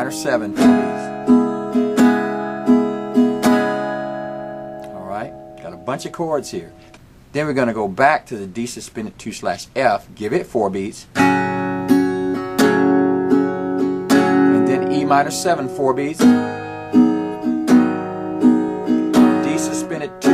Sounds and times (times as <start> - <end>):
Strum: 0.0 - 7.8, 11.2 - 20.3
Acoustic guitar: 0.0 - 8.8, 10.1 - 20.3.